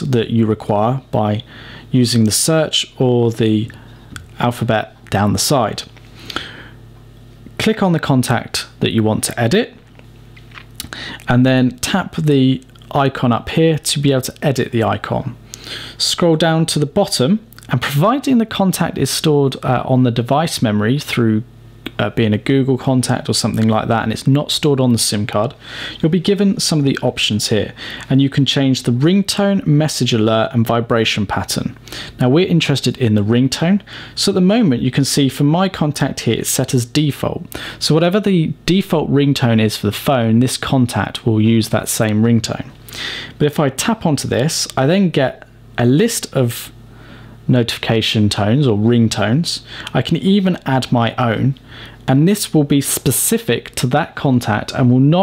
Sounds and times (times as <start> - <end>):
Speech: 0.0 - 5.9, 7.6 - 9.8, 10.8 - 15.4, 16.0 - 42.8, 43.4 - 46.8, 47.5 - 55.2.